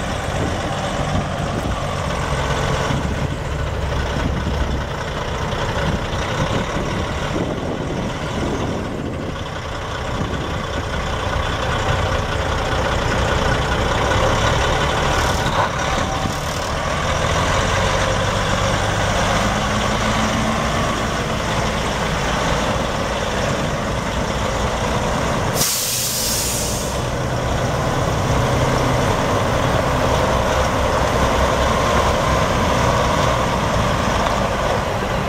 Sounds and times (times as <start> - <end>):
Truck: 0.0 - 35.2.